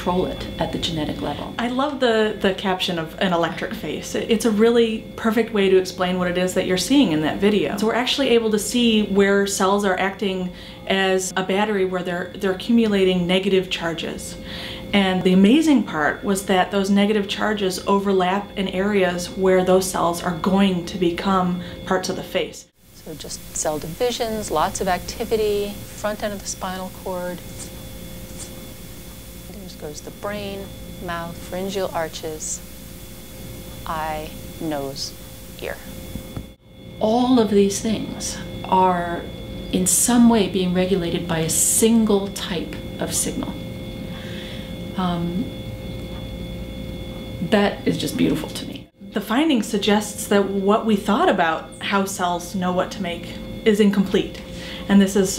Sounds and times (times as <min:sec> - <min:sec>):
Speech: 0:00.0 - 0:27.7, 0:29.5 - 0:32.6, 0:33.9 - 0:35.9, 0:37.0 - 0:43.6, 0:45.0 - 0:45.5, 0:47.4 - 0:55.3.